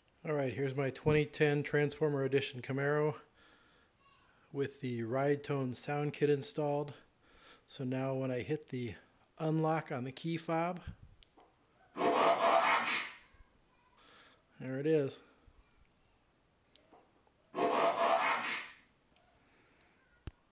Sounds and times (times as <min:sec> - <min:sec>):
Speech: 0:00.2 - 0:03.2, 0:04.6 - 0:07.0, 0:07.7 - 0:10.9, 0:14.6 - 0:15.2.